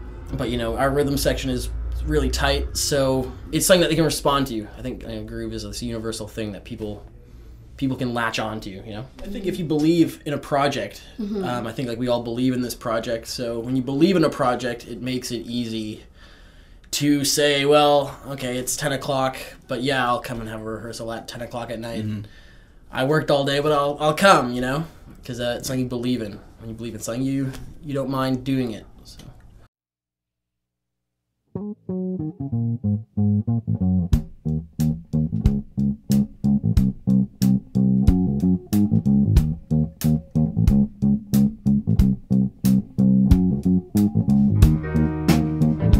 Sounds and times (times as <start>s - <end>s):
Speech: 0.3s - 7.1s, 7.8s - 16.1s, 16.9s - 22.3s, 22.9s - 29.4s.